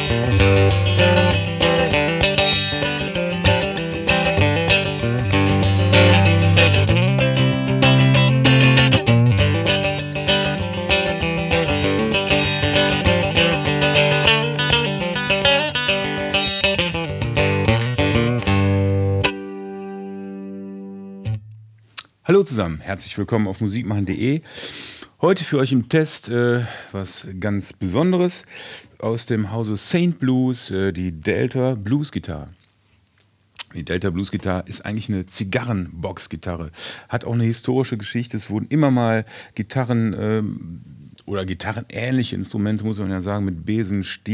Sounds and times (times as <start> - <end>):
Strum: 0.0 - 22.1
Blues: 0.0 - 22.2
Speech: 22.2 - 24.5, 25.2 - 32.6, 33.6 - 44.3.